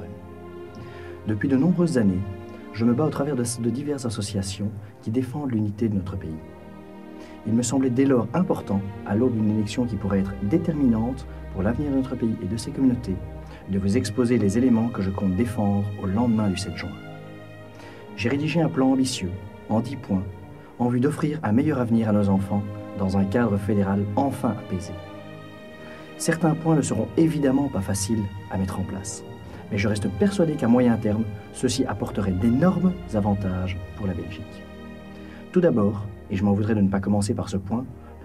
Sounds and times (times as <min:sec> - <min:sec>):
Music: 0:00.0 - 0:38.2
Speech: 0:01.2 - 0:06.5, 0:07.4 - 0:17.1, 0:18.2 - 0:25.0, 0:26.2 - 0:34.6, 0:35.5 - 0:38.2.